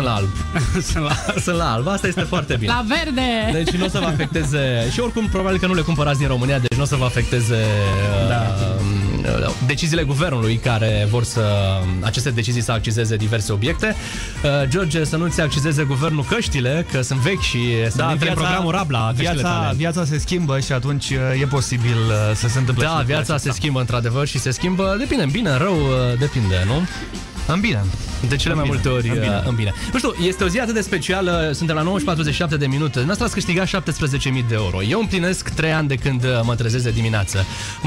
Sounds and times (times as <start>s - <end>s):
Music: 0.0s - 37.8s
Speech: 0.0s - 37.8s.